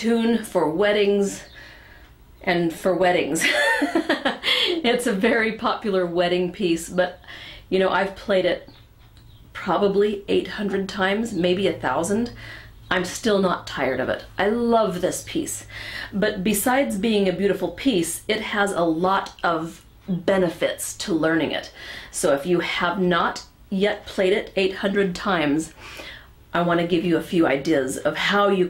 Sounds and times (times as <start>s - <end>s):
Speech: 0.0s - 1.5s, 2.4s - 3.4s, 4.8s - 8.7s, 9.6s - 25.8s, 26.5s - 28.7s.